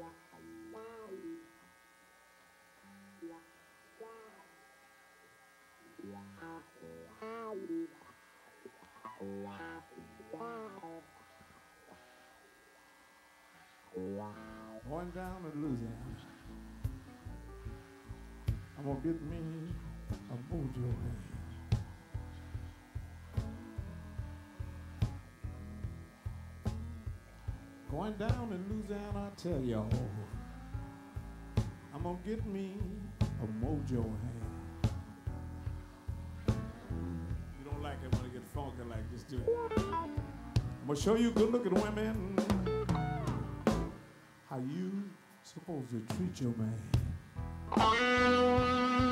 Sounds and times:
Guitar: 0.0 - 49.1
Speech: 14.0 - 16.4, 18.8 - 21.6, 27.9 - 30.3, 31.9 - 34.5, 37.5 - 39.7, 40.8 - 42.4, 44.5 - 47.1.

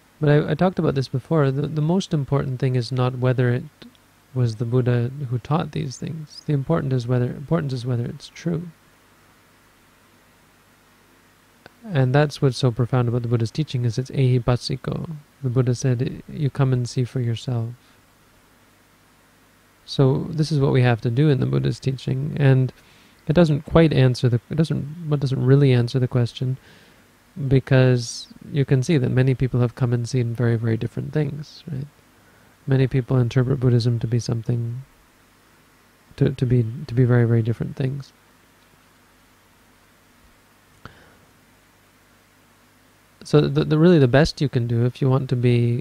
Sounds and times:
Speech: 0.2 - 8.8, 11.7 - 17.8, 19.9 - 26.6, 27.4 - 32.0, 32.7 - 34.9, 36.2 - 38.2, 43.2 - 45.8.

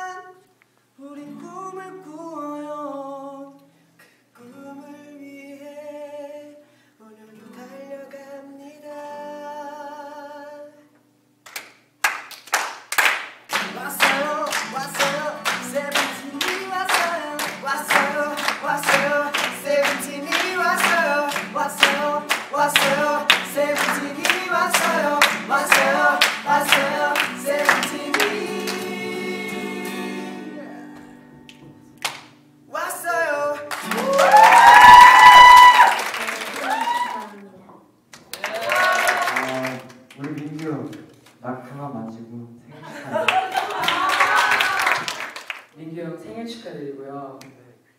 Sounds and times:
Music: 13.5 - 34.2.

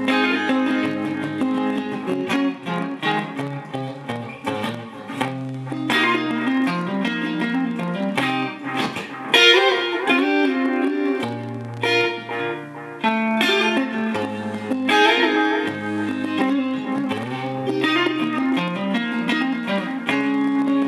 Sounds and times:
Electric guitar: 0.0 - 20.8.

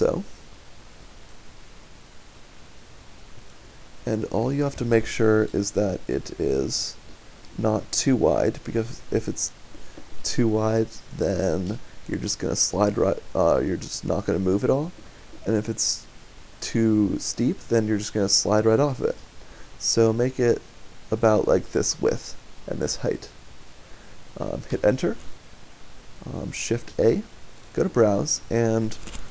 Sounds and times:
Speech: 0.0 - 0.3, 4.0 - 7.0, 7.6 - 9.6, 10.2 - 19.2, 19.8 - 23.4, 24.4 - 25.2, 26.2 - 29.0.

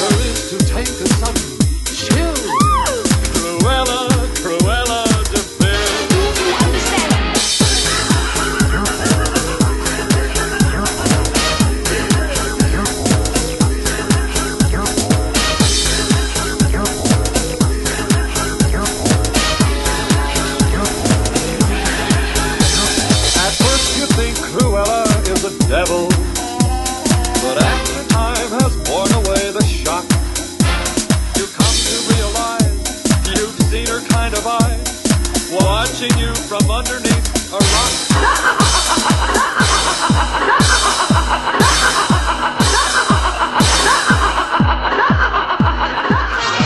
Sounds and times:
Exciting music: 0.0 - 46.6.

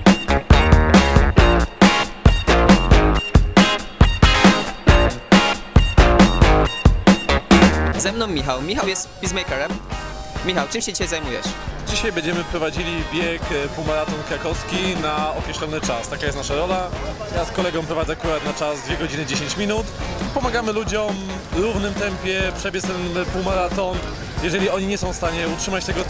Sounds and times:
Music: 0.0 - 26.1
Outside, urban or manmade: 0.0 - 26.1
Speech: 8.0 - 9.8, 10.4 - 26.1.

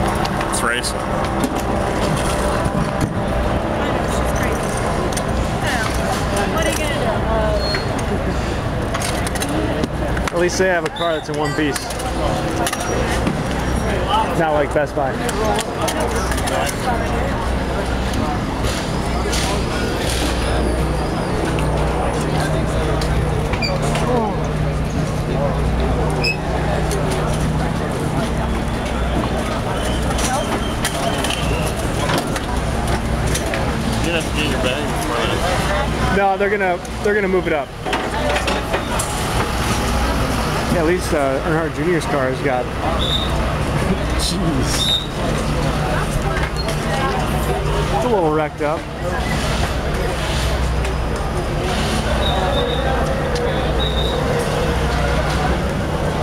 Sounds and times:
Vehicle: 0.0 - 56.2
Speech: 0.4 - 1.1, 9.4 - 21.0, 21.6 - 56.2.

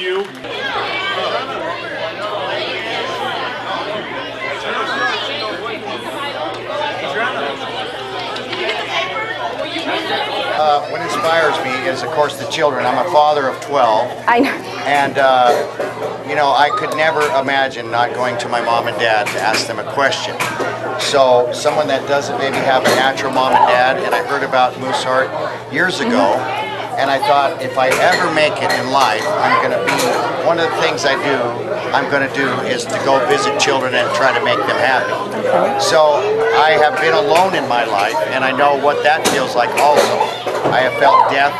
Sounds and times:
Speech: 16.3 - 41.5.

